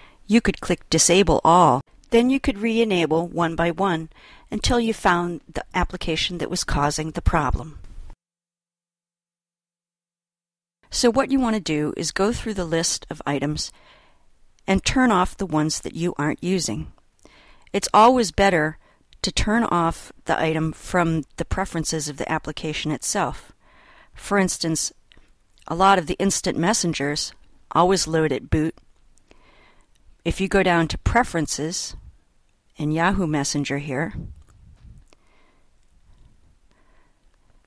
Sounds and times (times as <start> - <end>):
Inside, small room: 0.0 - 8.2, 10.8 - 37.6
Speech: 0.3 - 7.8, 10.9 - 13.8, 14.7 - 17.0, 17.8 - 23.5, 24.2 - 25.0, 25.6 - 28.8, 30.3 - 32.1, 32.8 - 34.4.